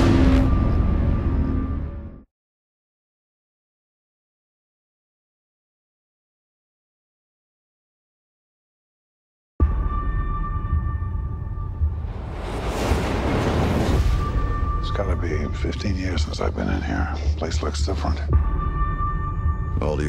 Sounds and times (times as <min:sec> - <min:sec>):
Sound effect: 0:00.0 - 0:02.3, 0:11.8 - 0:15.1.